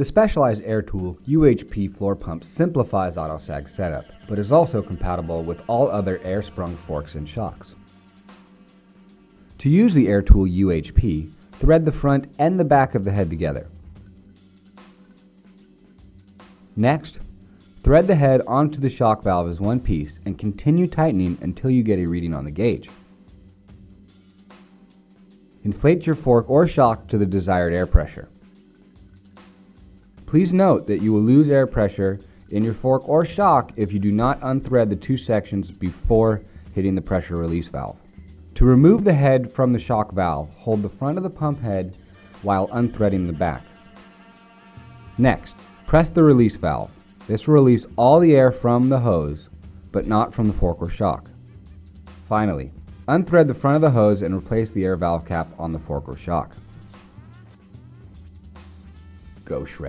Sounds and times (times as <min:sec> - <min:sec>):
Speech: 0:00.0 - 0:07.8, 0:09.6 - 0:13.8, 0:16.8 - 0:22.9, 0:25.6 - 0:28.4, 0:30.3 - 0:38.0, 0:38.6 - 0:43.7, 0:45.2 - 0:51.3, 0:52.3 - 0:56.6, 0:59.4 - 0:59.8
Music: 0:00.0 - 0:59.8.